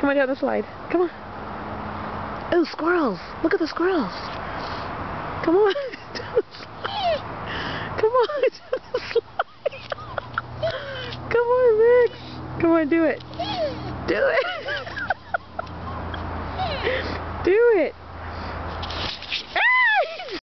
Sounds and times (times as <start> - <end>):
Speech: 0.0 - 1.2, 2.5 - 4.2, 11.3 - 13.2, 17.4 - 18.0.